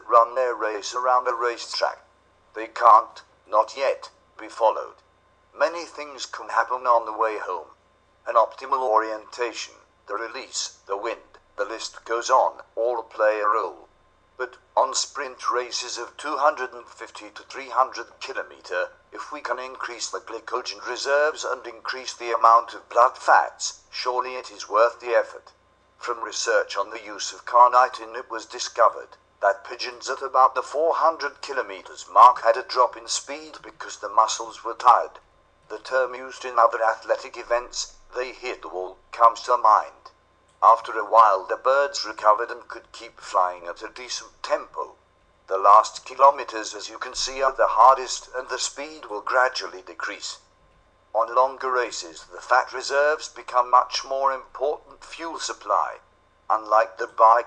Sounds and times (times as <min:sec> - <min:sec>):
Speech: 0:00.0 - 0:05.0, 0:05.6 - 0:07.7, 0:08.3 - 0:50.4, 0:51.2 - 0:57.4.